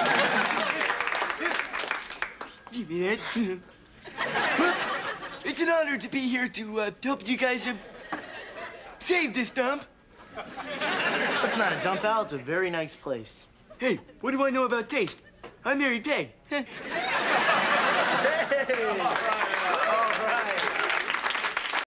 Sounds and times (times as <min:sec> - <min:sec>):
Speech: 0:05.4 - 0:07.8, 0:09.0 - 0:09.9, 0:11.4 - 0:16.7.